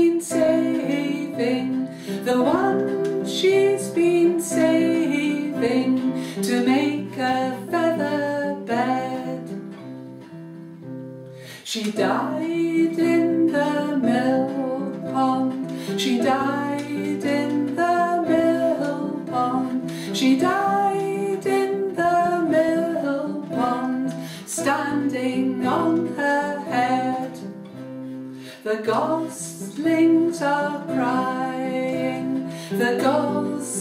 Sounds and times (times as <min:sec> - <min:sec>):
Music: 0:00.0 - 0:33.8.